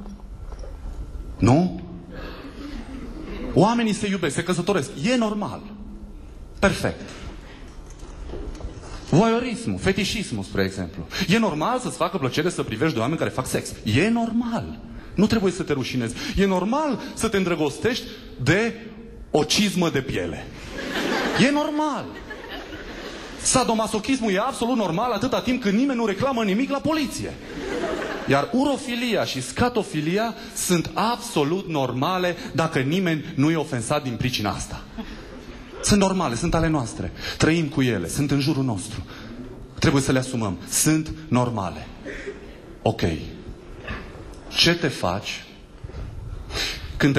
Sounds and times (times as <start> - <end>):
Speech: 1.4 - 2.0, 3.6 - 5.8, 6.6 - 7.1, 9.1 - 20.5, 21.4 - 22.2, 23.4 - 27.4, 28.3 - 34.9, 35.8 - 39.1, 39.8 - 42.0, 42.8 - 43.4, 44.5 - 45.6.